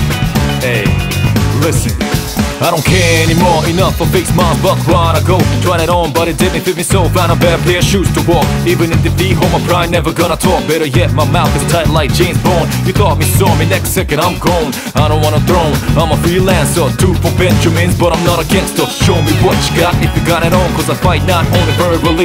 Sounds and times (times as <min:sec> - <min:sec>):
Music: 0:00.0 - 0:22.2.